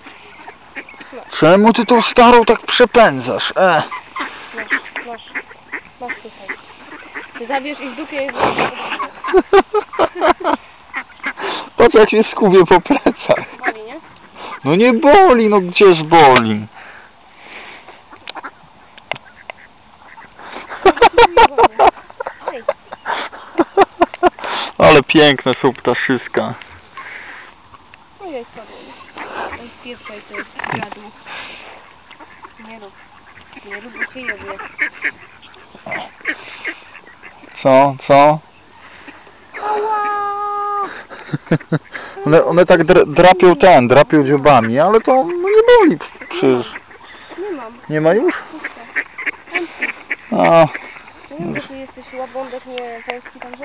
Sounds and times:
Honk: 0:00.0 - 0:10.3, 0:10.9 - 0:17.1, 0:18.1 - 0:22.8, 0:25.1 - 0:27.5, 0:28.3 - 0:39.8, 0:40.8 - 0:53.6.

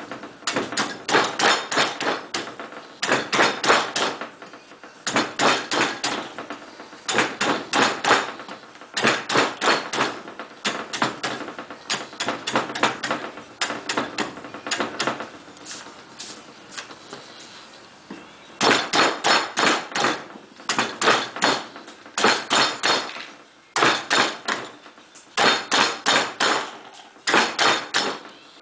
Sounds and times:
Wood: 0:00.0 - 0:15.4, 0:18.1 - 0:28.4.

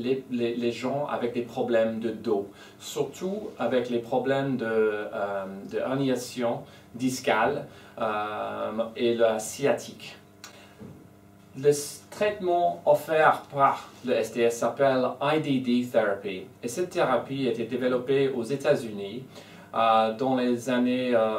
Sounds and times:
Speech: 0:00.0 - 0:10.2, 0:11.6 - 0:21.3.

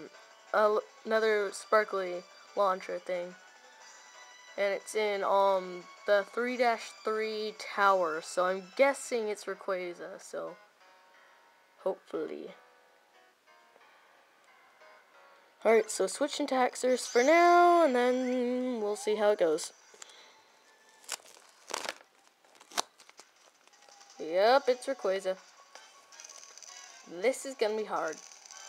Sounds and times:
Music: 0:00.0 - 0:28.6.

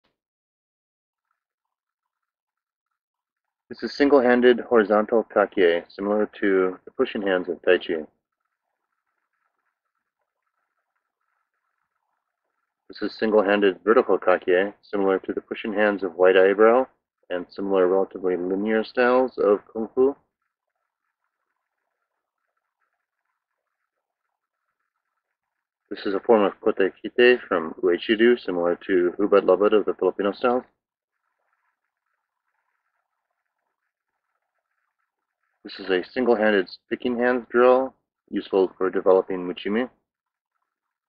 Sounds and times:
Speech: 0:03.7 - 0:08.1, 0:12.9 - 0:20.2, 0:25.9 - 0:30.7, 0:35.7 - 0:40.0.

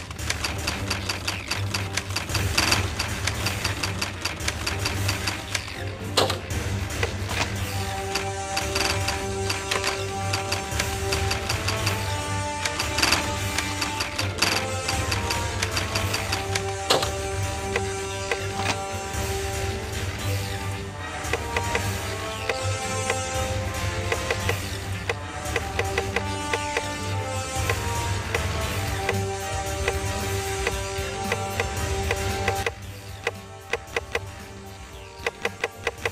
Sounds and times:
Music: 0:00.0 - 0:36.1.

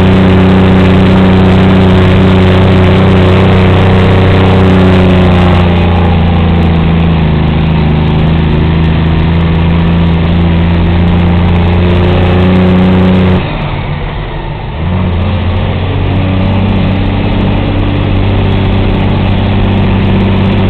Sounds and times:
Accelerating, revving, vroom: 0:00.0 - 0:13.5, 0:14.8 - 0:20.6
Vehicle: 0:00.0 - 0:20.6.

